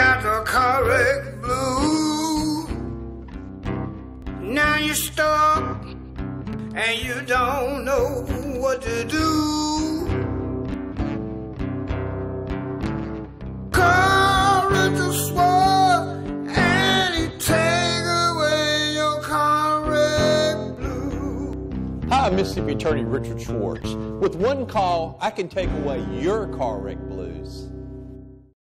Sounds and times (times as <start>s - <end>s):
Music: 0.0s - 28.6s
Speech: 22.1s - 27.7s.